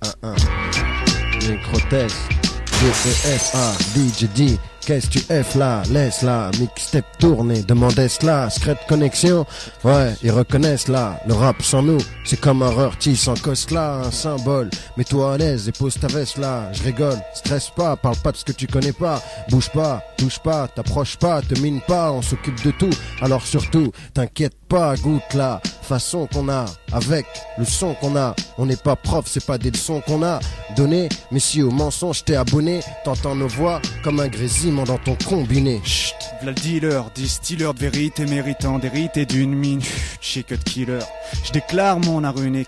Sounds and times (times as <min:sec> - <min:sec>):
Music: 0:00.0 - 0:42.6.